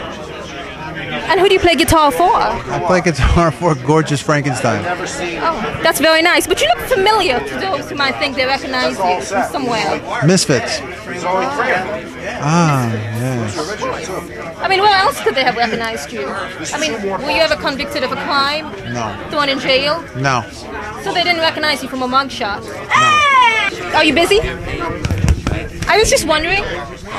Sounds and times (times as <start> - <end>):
Speech: 8.8 - 14.3, 18.9 - 19.2, 20.2 - 21.2.